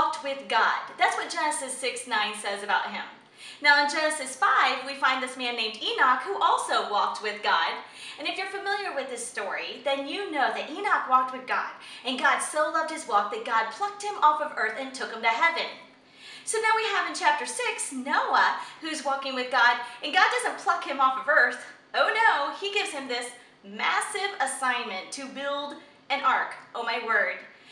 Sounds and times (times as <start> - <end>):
Speech: 0.0 - 15.9, 16.5 - 27.5.